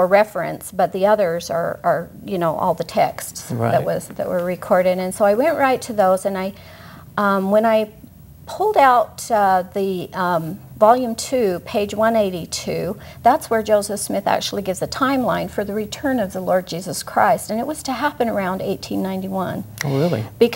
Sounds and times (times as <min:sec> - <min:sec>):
Speech: 0:00.0 - 0:06.1, 0:11.0 - 0:20.5
Inside, small room: 0:00.0 - 0:20.5.